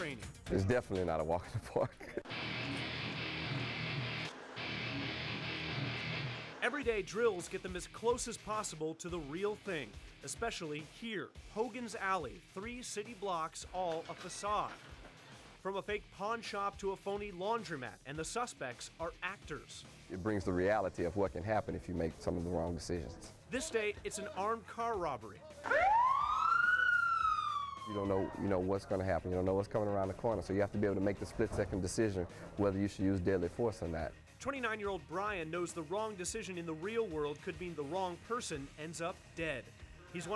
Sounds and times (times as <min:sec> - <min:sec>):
Speech: 0:00.0 - 0:02.2, 0:06.6 - 0:14.8, 0:15.6 - 0:25.7, 0:28.0 - 0:40.3
Music: 0:00.0 - 0:26.4, 0:27.0 - 0:40.3.